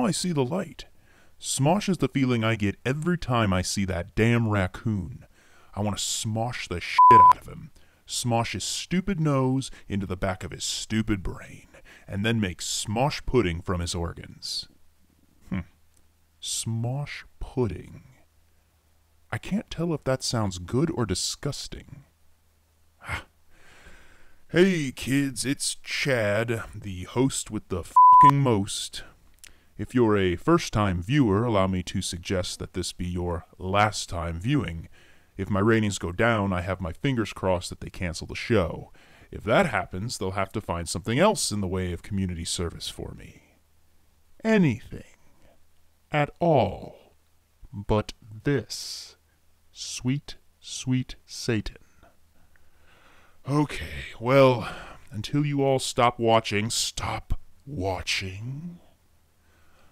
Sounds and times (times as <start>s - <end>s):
Speech: 0.0s - 14.8s, 15.5s - 15.7s, 16.4s - 18.2s, 19.3s - 22.1s, 24.5s - 29.2s, 29.8s - 43.5s, 44.4s - 45.2s, 46.1s - 47.1s, 47.7s - 51.8s, 53.4s - 59.0s.